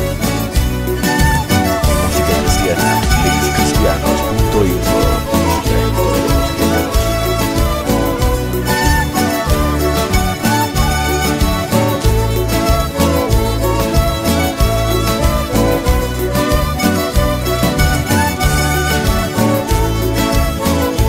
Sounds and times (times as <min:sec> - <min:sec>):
Exciting music: 0:01.2 - 0:13.9.